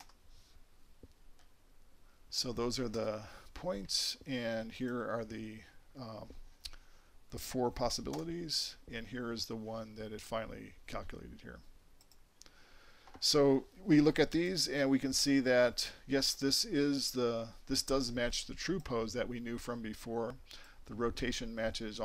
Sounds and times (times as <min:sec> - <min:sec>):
Speech: 0:02.3 - 0:06.4, 0:07.3 - 0:11.7, 0:13.2 - 0:22.0.